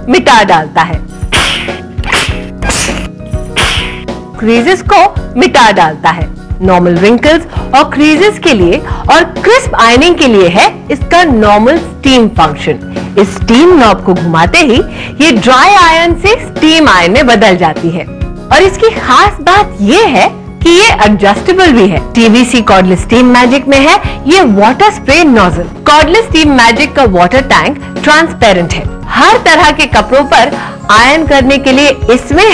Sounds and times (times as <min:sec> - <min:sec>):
Music: 0:00.0 - 0:32.5.